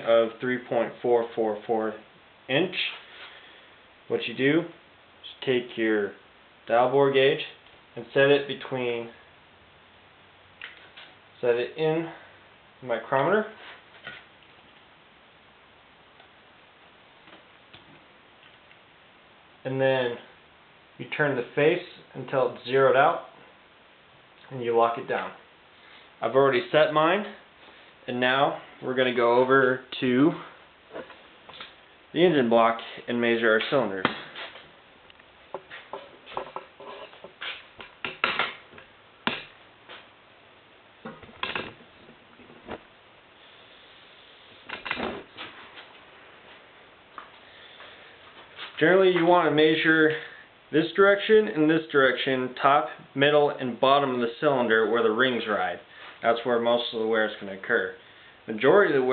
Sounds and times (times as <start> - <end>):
Speech: 0.0 - 3.0, 4.1 - 9.2, 11.4 - 13.6, 19.6 - 20.3, 21.0 - 23.4, 24.4 - 25.4, 26.2 - 27.5, 28.1 - 30.6, 32.2 - 34.2, 48.8 - 59.1.